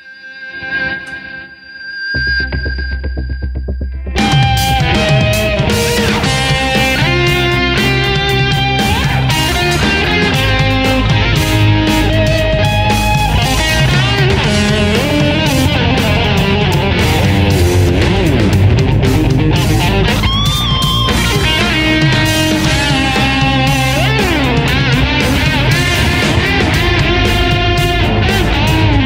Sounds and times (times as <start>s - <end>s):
Electric guitar: 0.0s - 29.0s
Strum: 2.2s - 29.0s.